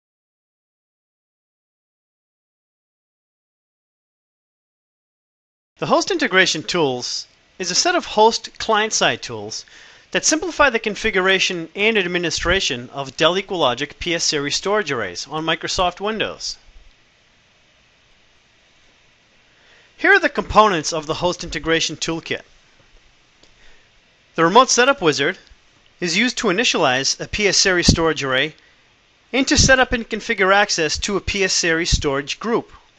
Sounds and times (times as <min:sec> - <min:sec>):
Speech: 0:05.8 - 0:16.7, 0:20.0 - 0:22.5, 0:24.4 - 0:28.6, 0:29.3 - 0:32.9.